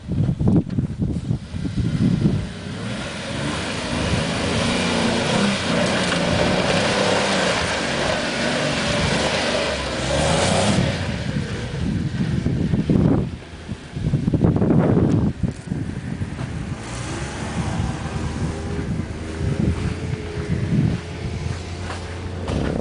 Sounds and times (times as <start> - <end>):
Outside, rural or natural: 0.0 - 22.8
Vehicle: 0.0 - 22.8.